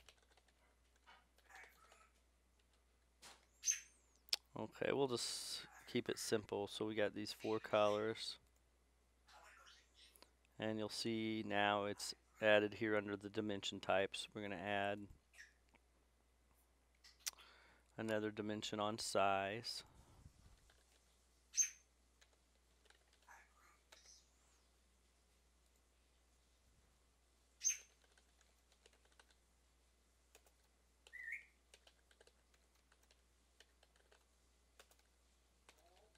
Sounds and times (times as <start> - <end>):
Inside, small room: 0.0 - 36.1
Speech: 4.5 - 8.4, 10.6 - 15.1, 18.0 - 19.9.